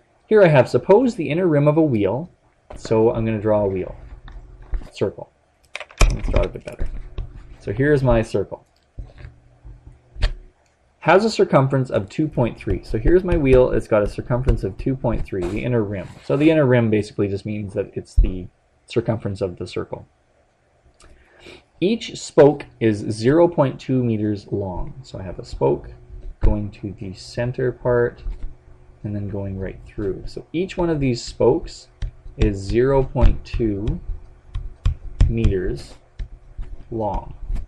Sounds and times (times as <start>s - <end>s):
Speech: 0.3s - 4.1s, 4.8s - 5.3s, 6.2s - 6.9s, 7.6s - 8.6s, 11.0s - 20.1s, 21.8s - 28.2s, 29.0s - 34.0s, 35.2s - 36.0s, 36.9s - 37.4s.